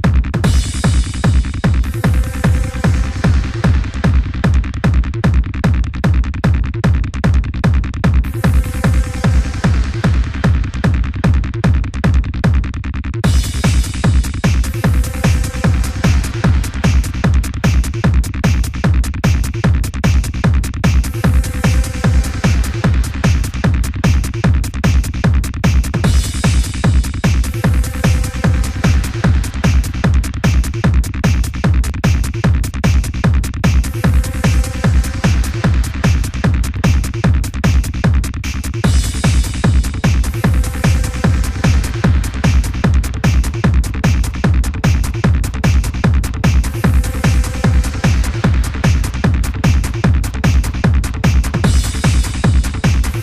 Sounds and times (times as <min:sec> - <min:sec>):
Techno: 0:00.0 - 0:53.2.